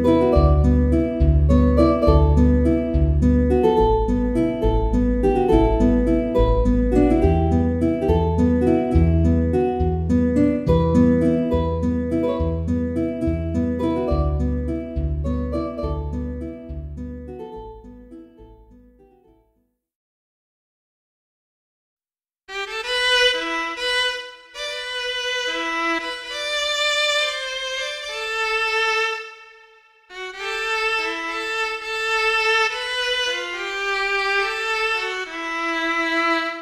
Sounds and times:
Violin, fiddle: 0:00.0 - 0:16.8, 0:22.5 - 0:36.6.

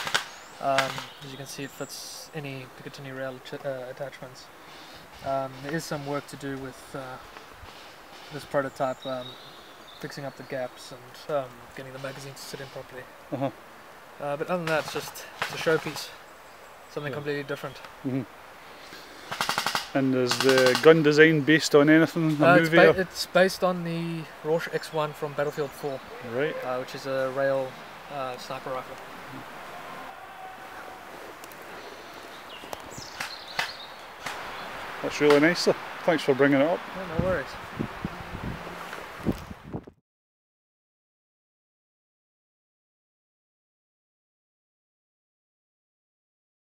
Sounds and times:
Outside, rural or natural: 0:00.0 - 0:40.0
Speech: 0:00.6 - 0:04.5, 0:05.2 - 0:07.2, 0:08.4 - 0:09.3, 0:10.0 - 0:13.5, 0:14.2 - 0:16.2, 0:16.9 - 0:18.3, 0:20.0 - 0:29.0, 0:35.0 - 0:37.6.

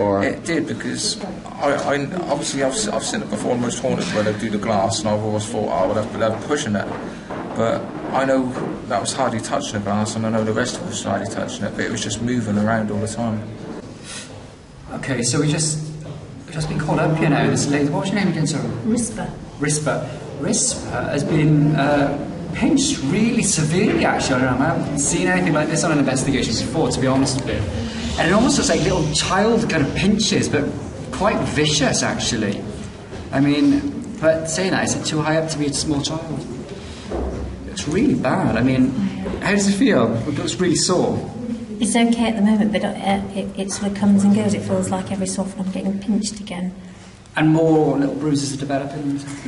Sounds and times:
Male speech, man speaking: 0:00.0 - 0:13.6, 0:14.9 - 0:36.6, 0:37.6 - 0:41.4, 0:47.4 - 0:49.4.

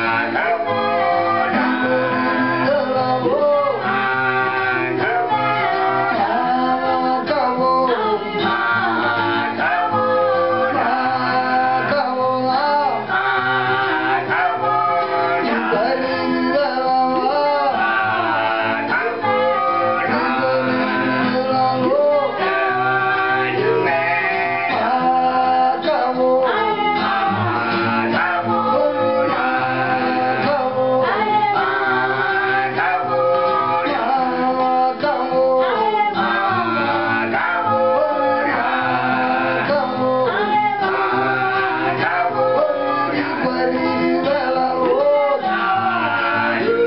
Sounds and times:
Acoustic guitar: 0:00.0 - 0:46.8.

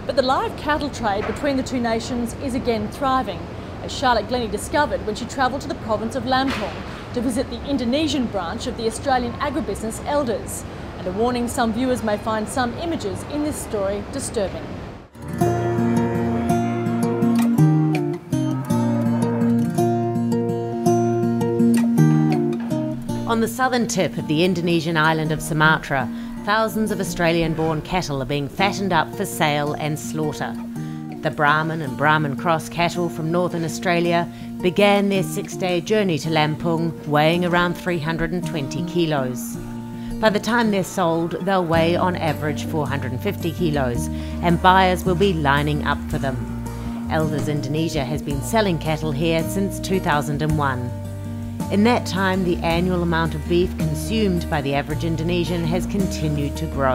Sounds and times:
Speech: 0:00.1 - 0:14.7, 0:23.3 - 0:30.6, 0:31.2 - 0:39.6, 0:40.2 - 0:46.4, 0:47.1 - 0:50.9, 0:51.7 - 0:56.9
Music: 0:15.1 - 0:56.9.

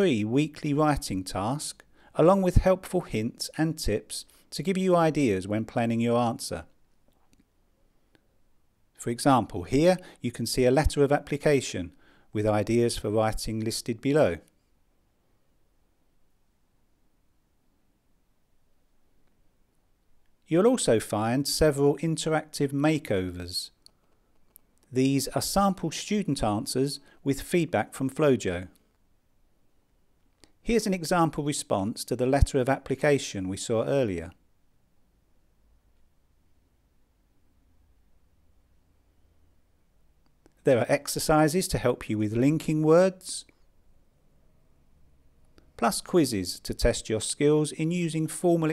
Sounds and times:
Speech: 0:00.0 - 0:06.8, 0:09.0 - 0:14.6, 0:20.5 - 0:23.8, 0:24.9 - 0:28.8, 0:30.6 - 0:34.4, 0:40.6 - 0:43.5, 0:45.8 - 0:48.7.

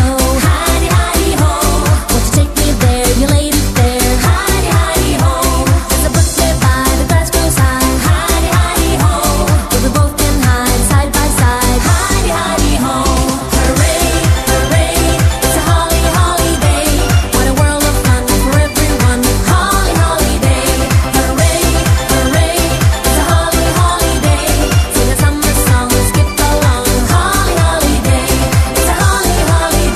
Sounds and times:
Music: 0:00.0 - 0:29.9.

